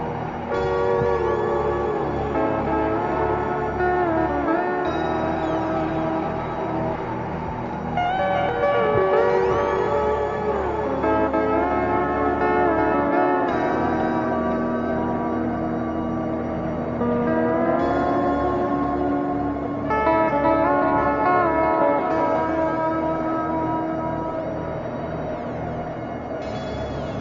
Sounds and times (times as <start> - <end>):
Ambient music: 0.0 - 27.2.